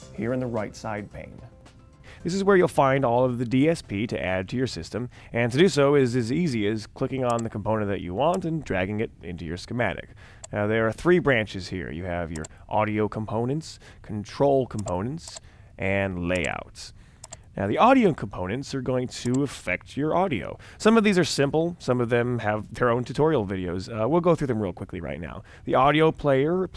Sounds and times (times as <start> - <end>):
Speech: 0.0 - 1.5, 2.2 - 17.0, 17.6 - 26.7.